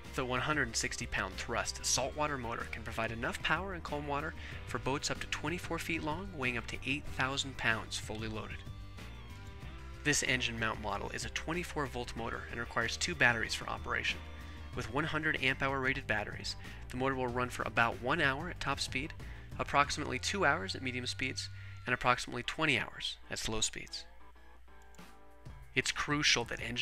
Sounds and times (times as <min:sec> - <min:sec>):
Music: 0:00.0 - 0:26.8
Speech: 0:00.2 - 0:08.6, 0:10.0 - 0:14.2, 0:14.8 - 0:24.1, 0:25.8 - 0:26.8.